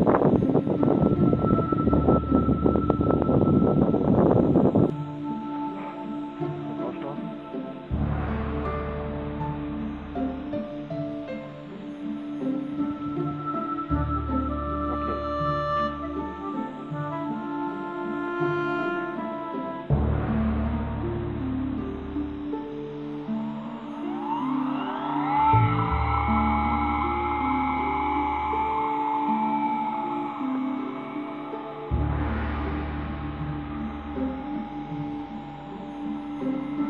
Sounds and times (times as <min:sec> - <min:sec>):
Music: 0:00.0 - 0:36.8.